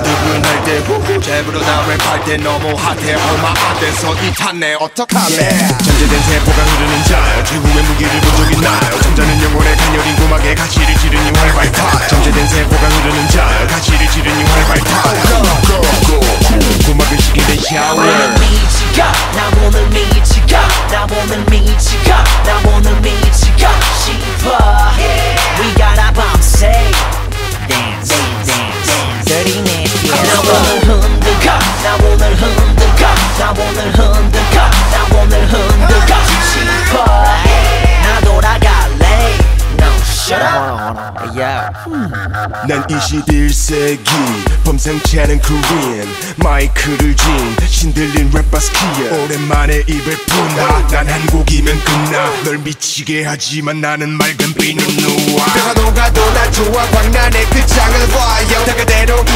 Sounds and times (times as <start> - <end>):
Hip hop music: 0.0 - 59.3
Rapping: 0.0 - 59.3.